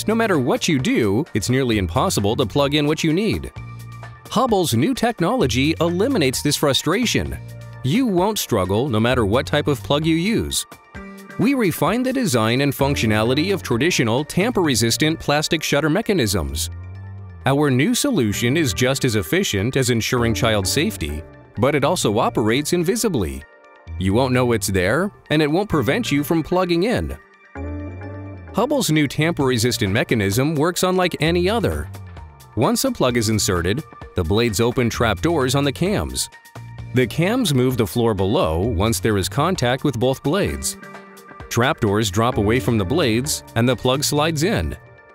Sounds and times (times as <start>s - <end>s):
Speech: 0.0s - 3.5s, 4.3s - 10.6s, 11.4s - 16.7s, 17.5s - 23.4s, 24.0s - 27.2s, 28.6s - 31.9s, 32.6s - 36.3s, 37.0s - 40.8s, 41.5s - 44.8s
Music: 0.0s - 45.1s.